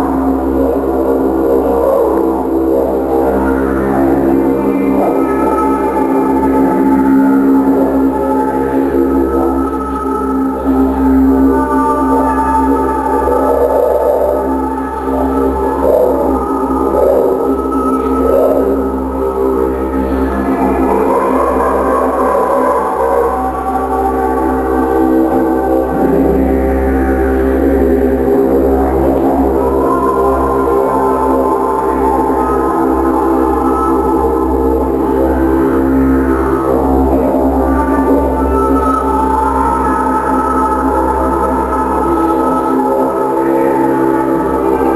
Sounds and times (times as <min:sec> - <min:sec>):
Music: 0:00.0 - 0:44.9.